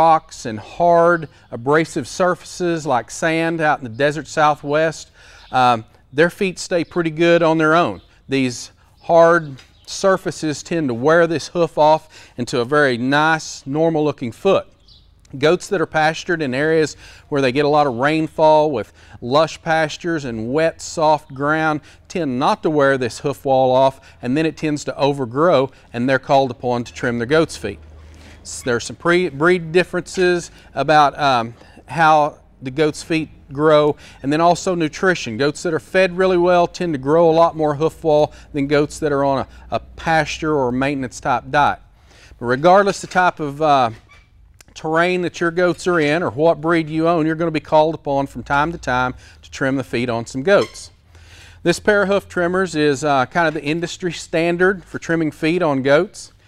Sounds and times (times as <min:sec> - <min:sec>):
Speech: 0:00.0 - 0:27.8, 0:28.4 - 0:41.8, 0:42.4 - 0:44.0, 0:44.6 - 0:51.0, 0:51.6 - 0:56.4.